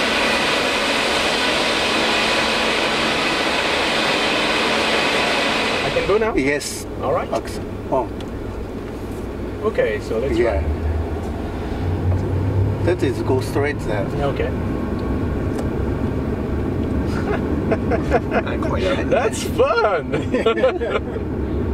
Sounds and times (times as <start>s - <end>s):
Vehicle: 0.0s - 21.7s.